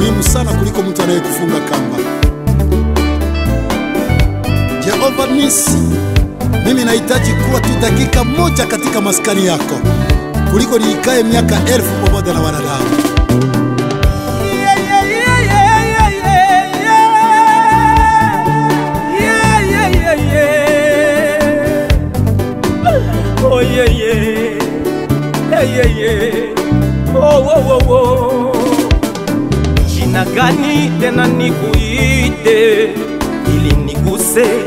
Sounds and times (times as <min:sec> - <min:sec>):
Music of Africa: 0:00.0 - 0:34.6.